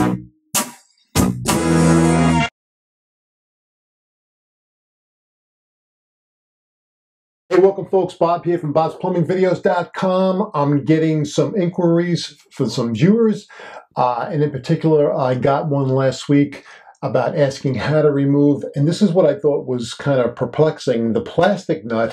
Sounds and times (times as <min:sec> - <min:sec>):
Speech: 0:07.5 - 0:22.1.